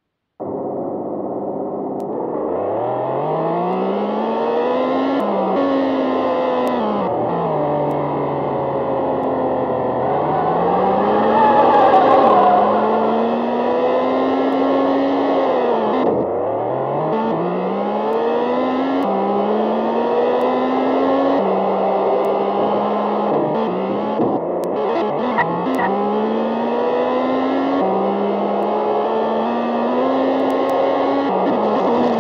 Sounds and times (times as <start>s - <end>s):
Car: 0.0s - 32.2s.